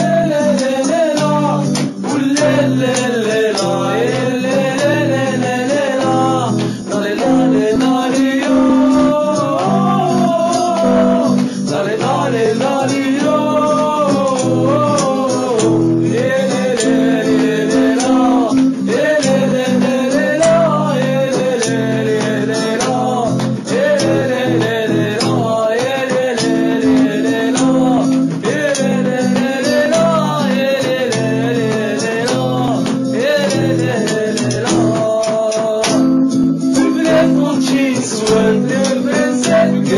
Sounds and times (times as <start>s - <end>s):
Music: 0.0s - 39.9s.